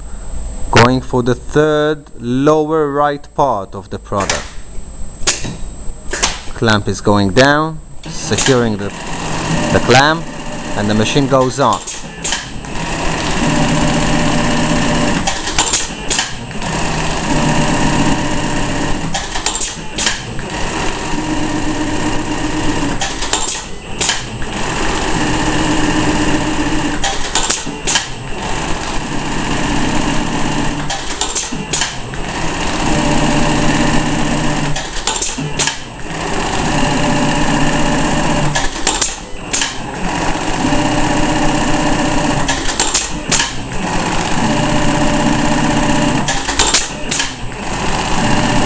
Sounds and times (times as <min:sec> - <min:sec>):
Sewing machine: 0:08.1 - 0:48.6.